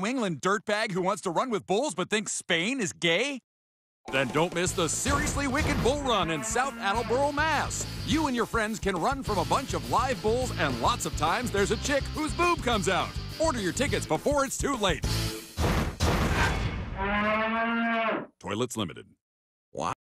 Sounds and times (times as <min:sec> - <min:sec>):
Speech: 0:00.0 - 0:03.4, 0:04.1 - 0:15.0, 0:18.4 - 0:19.2, 0:19.8 - 0:20.0
Music: 0:04.1 - 0:16.5.